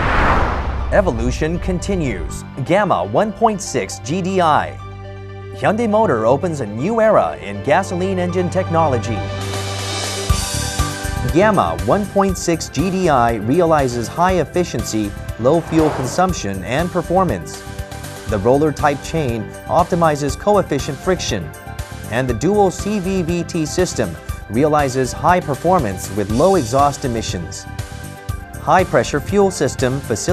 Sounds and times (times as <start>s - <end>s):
Music: 0.7s - 30.3s
Speech: 0.9s - 4.8s, 5.6s - 9.3s, 11.2s - 17.6s, 18.3s - 21.5s, 22.1s - 27.7s, 28.6s - 30.3s.